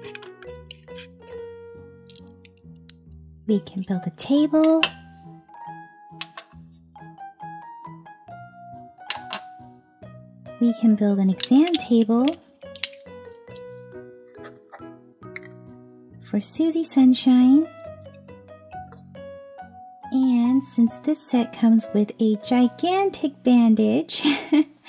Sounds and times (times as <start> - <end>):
Music: 0.0 - 24.8
Speech: 3.5 - 4.9, 10.6 - 12.4, 16.3 - 17.7, 20.2 - 24.4.